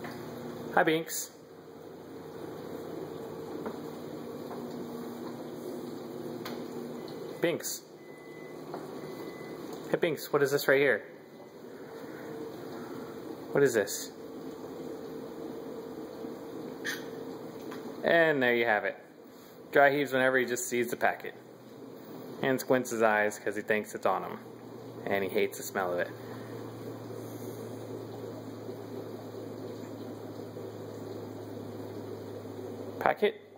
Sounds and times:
Speech: 0:00.7 - 0:01.4, 0:07.4 - 0:07.9, 0:09.9 - 0:11.1, 0:13.5 - 0:14.2, 0:18.0 - 0:19.0, 0:19.7 - 0:21.4, 0:22.4 - 0:24.4, 0:25.0 - 0:26.2, 0:33.0 - 0:33.5.

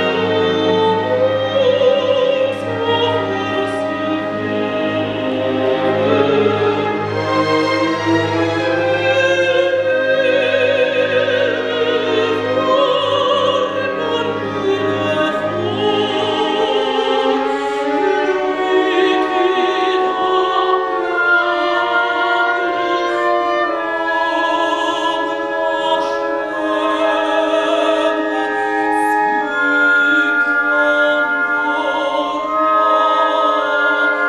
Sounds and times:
Opera: 0:00.0 - 0:34.2
Orchestra: 0:00.0 - 0:34.2
Violin, fiddle: 0:00.0 - 0:34.2.

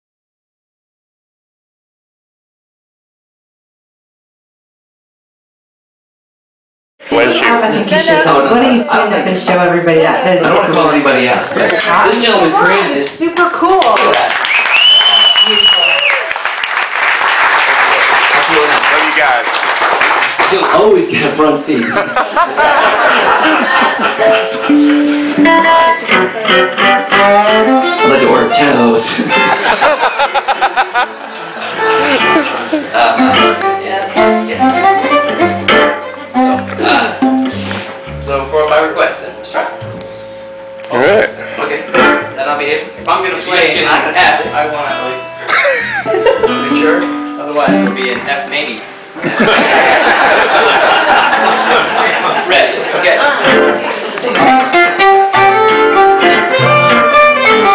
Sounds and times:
Music: 0:24.2 - 0:29.9, 0:30.5 - 0:49.5, 0:51.0 - 0:52.4, 0:53.2 - 0:57.7.

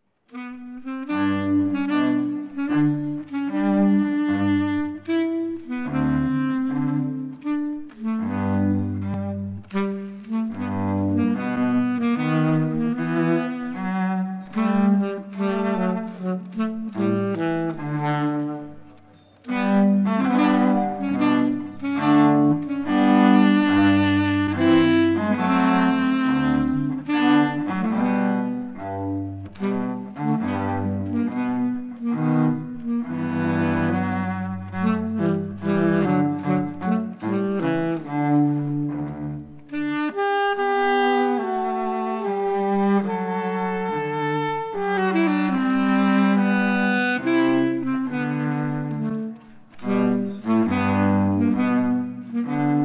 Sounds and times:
Cello: 0:00.0 - 0:52.8.

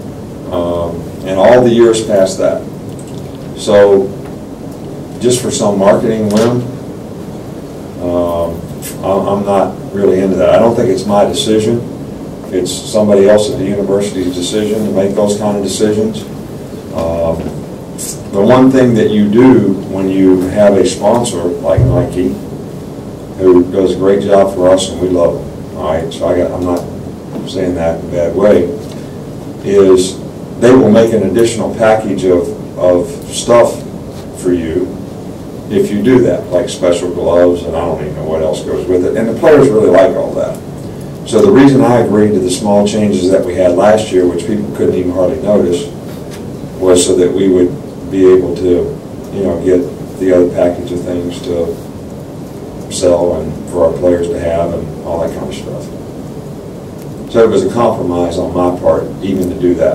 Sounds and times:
Speech: 0:00.5 - 0:02.7, 0:03.6 - 0:04.2, 0:05.2 - 0:06.8, 0:08.0 - 0:11.9, 0:12.5 - 0:16.3, 0:16.9 - 0:22.5, 0:23.4 - 0:28.9, 0:29.6 - 0:35.0, 0:35.7 - 0:40.6, 0:41.2 - 0:46.0, 0:46.8 - 0:51.8, 0:52.9 - 0:56.0, 0:57.3 - 0:59.9.

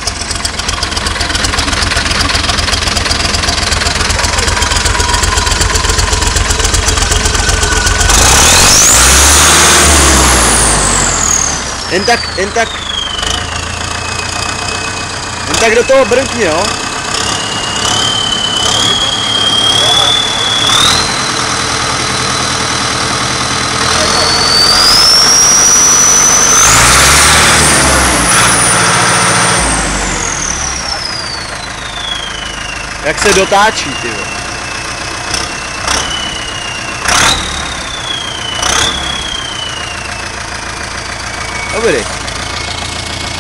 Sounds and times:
Speech: 0:11.9 - 0:12.7, 0:15.5 - 0:16.8, 0:33.0 - 0:34.4, 0:41.7 - 0:42.1.

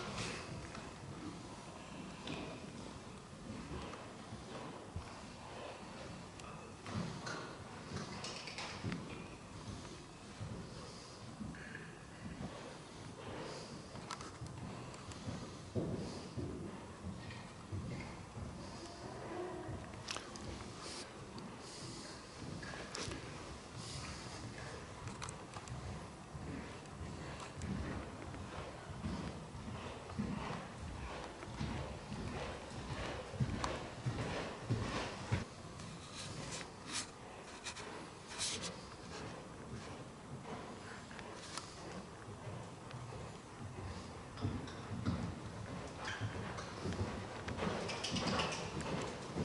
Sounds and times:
Inside, large room or hall: 0:00.0 - 0:49.4.

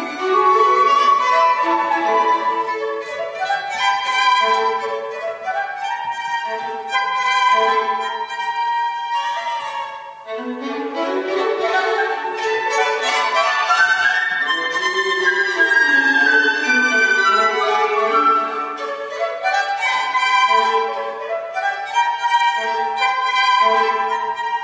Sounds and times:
Flute: 0:00.0 - 0:24.6
Violin, fiddle: 0:00.0 - 0:24.6.

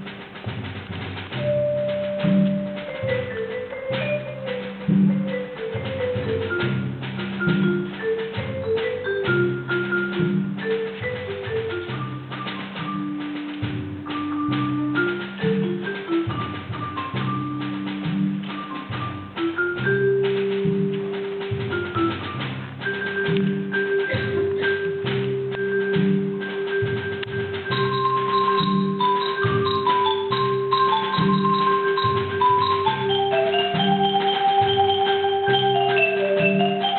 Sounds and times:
Percussion: 0:00.0 - 0:36.9.

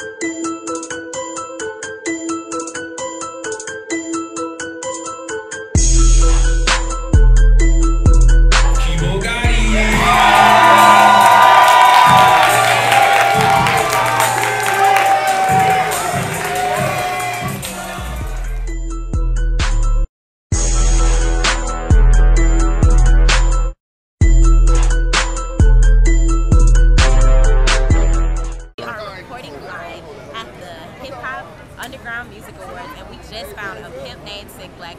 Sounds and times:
Music: 0:00.0 - 0:28.8
Speech: 0:28.8 - 0:34.9.

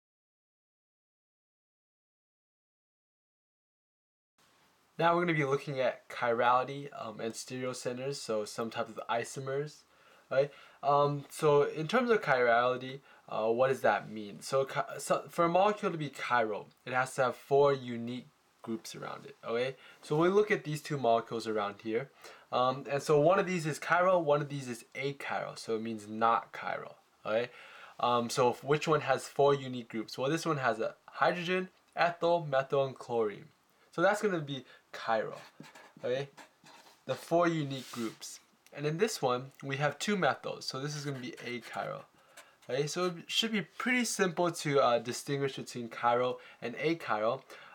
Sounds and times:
Speech: 0:05.0 - 0:47.5.

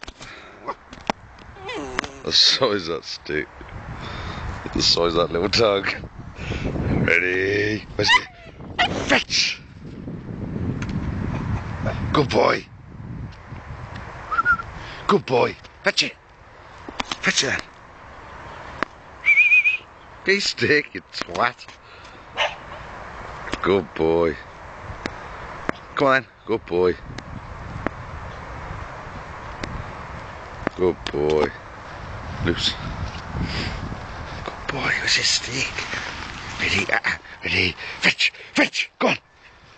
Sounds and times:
Speech: 0:01.6 - 0:03.5, 0:04.7 - 0:06.0, 0:07.0 - 0:08.3, 0:09.1 - 0:09.6, 0:12.1 - 0:12.7, 0:15.1 - 0:16.2, 0:17.2 - 0:17.7, 0:20.3 - 0:21.7, 0:23.6 - 0:24.5, 0:26.0 - 0:27.0, 0:30.8 - 0:31.6, 0:32.5 - 0:32.8, 0:34.7 - 0:35.9, 0:36.6 - 0:39.2.

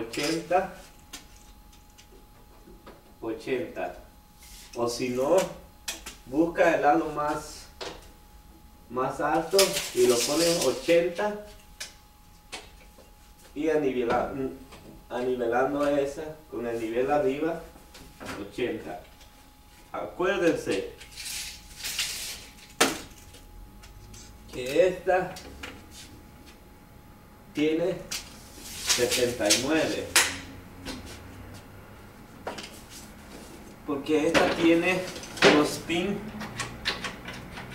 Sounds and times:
Speech: 0:00.0 - 0:00.8, 0:03.2 - 0:04.0, 0:04.8 - 0:05.6, 0:06.3 - 0:07.7, 0:08.9 - 0:11.5, 0:13.6 - 0:19.1, 0:19.9 - 0:21.0, 0:24.5 - 0:25.4, 0:27.6 - 0:28.1, 0:29.0 - 0:30.2, 0:33.9 - 0:36.3.

